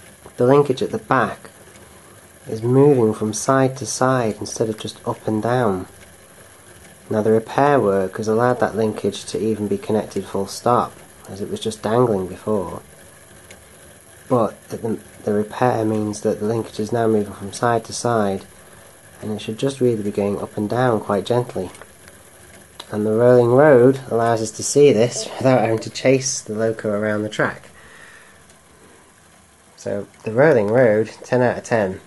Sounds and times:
Inside, small room: 0.0s - 32.0s
Speech: 0.4s - 1.5s, 2.5s - 5.9s, 7.1s - 12.8s, 14.3s - 18.5s, 19.2s - 21.8s, 22.8s - 27.7s, 29.8s - 32.0s.

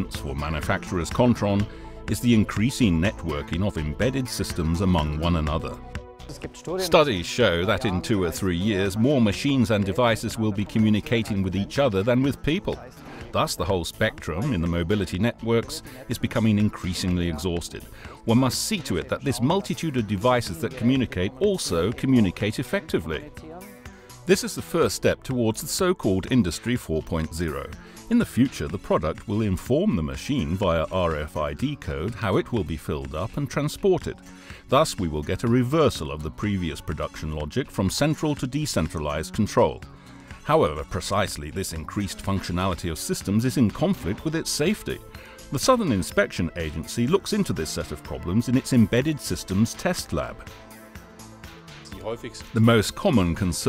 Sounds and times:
Speech: 0.0s - 23.7s, 24.3s - 50.4s, 51.9s - 53.6s
Music: 0.0s - 53.6s.

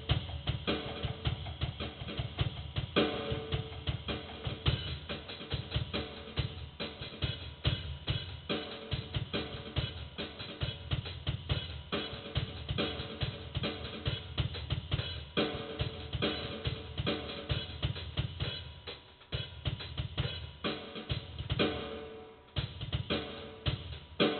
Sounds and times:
Drum: 0.0s - 24.3s
Drum kit: 0.0s - 24.3s
Inside, small room: 0.0s - 24.3s.

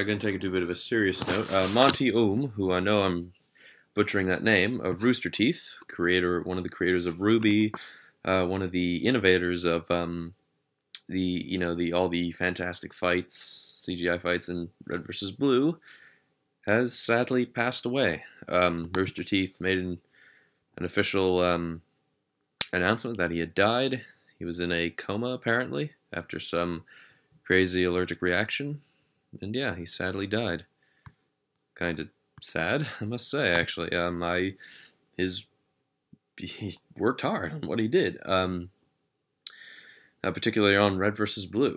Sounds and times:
Speech: 0.0s - 3.4s, 4.0s - 15.8s, 16.6s - 20.0s, 20.8s - 21.9s, 22.6s - 30.7s, 31.8s - 34.6s, 35.2s - 35.5s, 36.4s - 38.8s, 40.2s - 41.7s.

